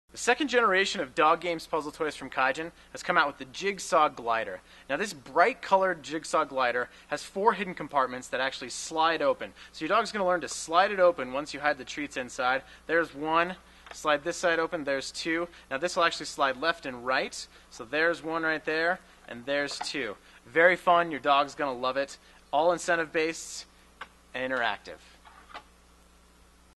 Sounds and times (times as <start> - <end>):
Speech: 0.2 - 23.7, 24.4 - 25.1.